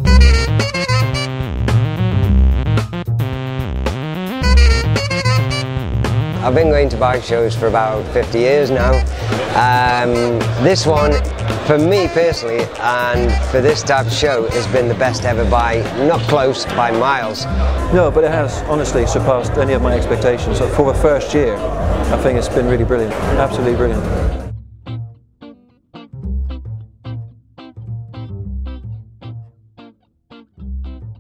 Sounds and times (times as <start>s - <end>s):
Music: 0.0s - 31.2s
Speech: 6.4s - 24.2s.